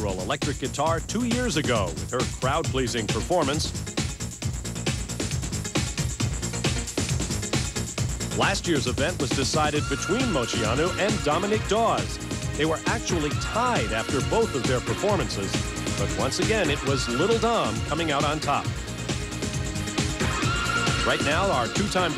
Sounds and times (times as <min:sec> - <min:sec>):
Speech: 0:00.0 - 0:03.7, 0:08.4 - 0:18.7, 0:21.0 - 0:22.1
Music: 0:00.0 - 0:22.1.